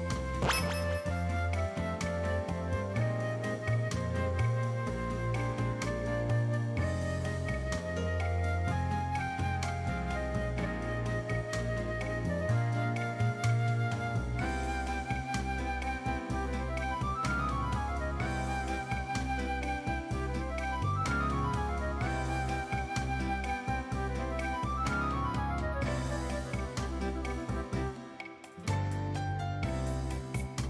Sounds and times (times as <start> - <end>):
Music: 0.0 - 30.6.